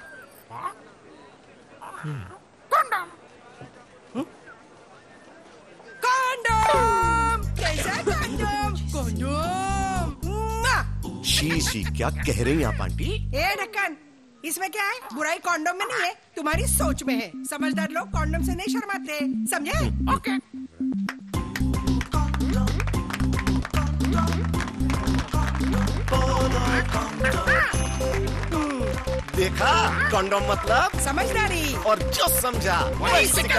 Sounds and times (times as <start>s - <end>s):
Speech: 0.6s - 13.9s, 29.4s - 33.5s
Music: 6.5s - 13.5s, 16.5s - 33.5s.